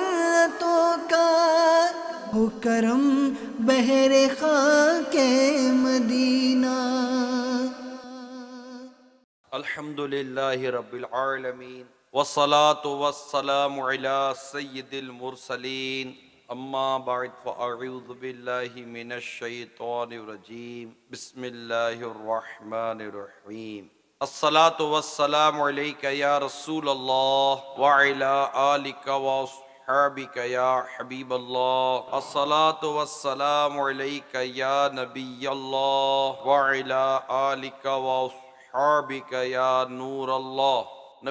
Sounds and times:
Male speech, man speaking: 9.5s - 41.3s.

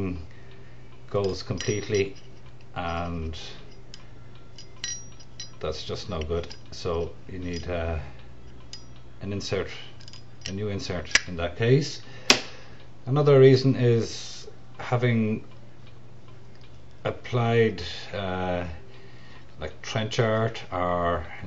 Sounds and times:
Speech: 0.0s - 0.3s, 1.1s - 2.2s, 2.8s - 3.7s, 5.6s - 8.2s, 9.2s - 12.1s, 13.1s - 15.5s, 17.0s - 18.8s, 19.6s - 21.4s.

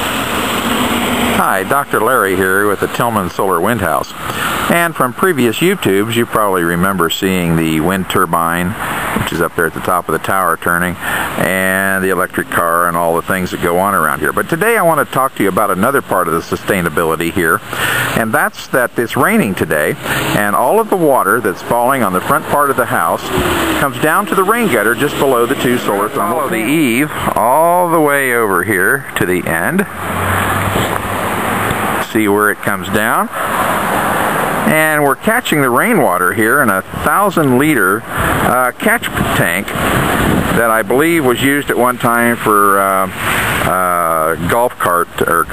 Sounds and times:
Speech: 1.4s - 17.6s, 18.2s - 29.9s, 32.0s - 33.3s, 34.6s - 39.7s, 40.6s - 45.5s.

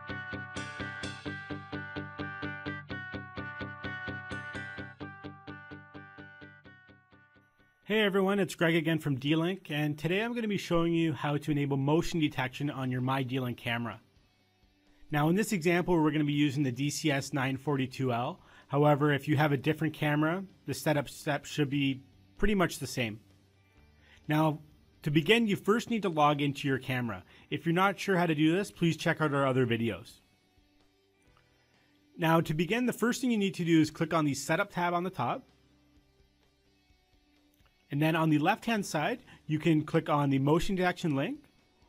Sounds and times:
Speech: 7.9s - 14.0s, 15.1s - 23.2s, 24.3s - 30.2s, 32.2s - 35.5s, 37.9s - 41.5s.

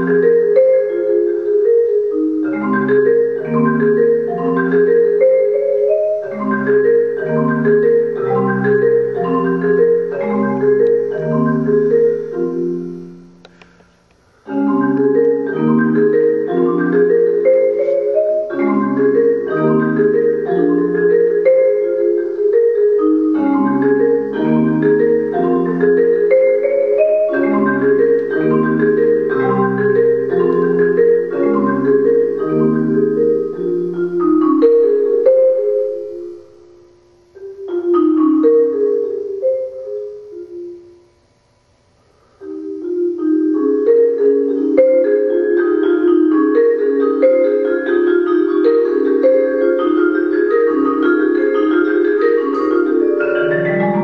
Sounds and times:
Glockenspiel: 0.0s - 13.5s, 14.5s - 36.8s, 37.4s - 41.2s, 42.4s - 54.0s
Marimba, xylophone: 0.0s - 13.8s, 14.4s - 41.3s, 42.2s - 54.0s.

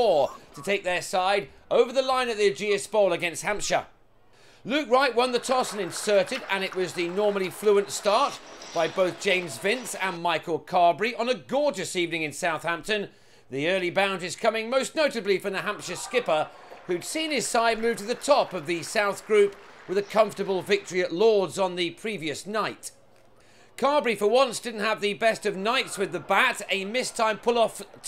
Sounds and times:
Speech: 0.0s - 3.9s, 4.7s - 23.0s, 23.8s - 28.0s.

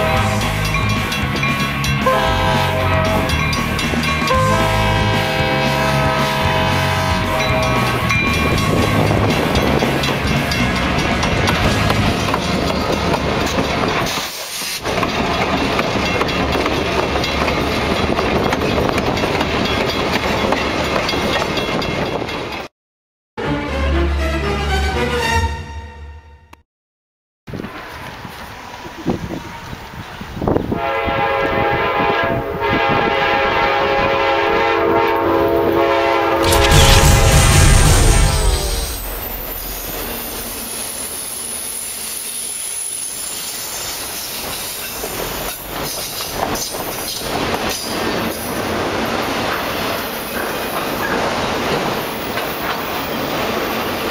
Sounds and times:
Music: 0.0s - 12.0s, 23.4s - 26.6s.

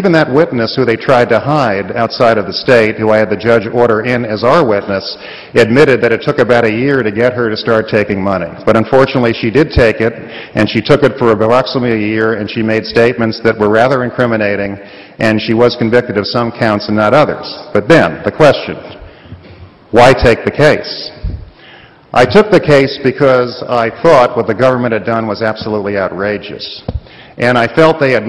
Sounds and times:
Male speech, man speaking: 0.0s - 18.9s, 20.0s - 21.2s, 22.2s - 26.8s, 27.4s - 28.2s
Narration, monologue: 0.0s - 28.2s.

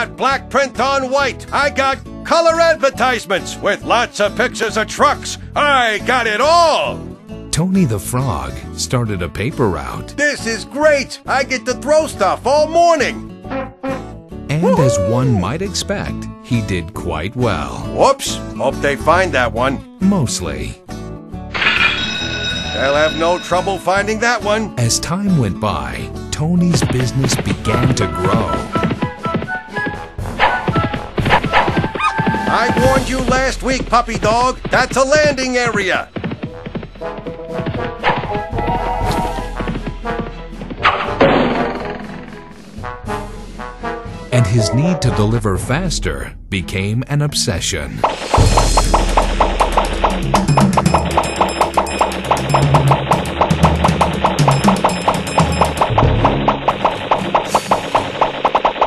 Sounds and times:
Speech: 0.0s - 13.2s, 14.5s - 20.8s, 22.8s - 28.6s, 32.5s - 36.1s, 44.4s - 48.0s
Music: 0.0s - 58.8s.

